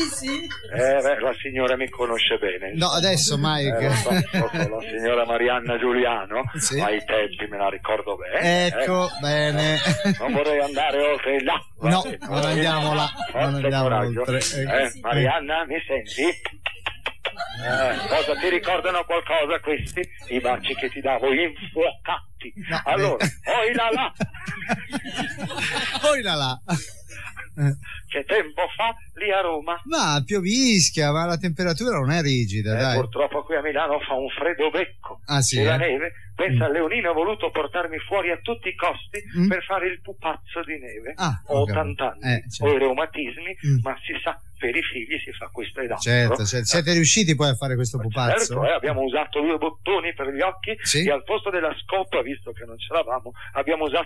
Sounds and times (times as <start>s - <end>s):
Speech: 0.0s - 16.5s, 17.4s - 26.9s, 27.6s - 54.0s.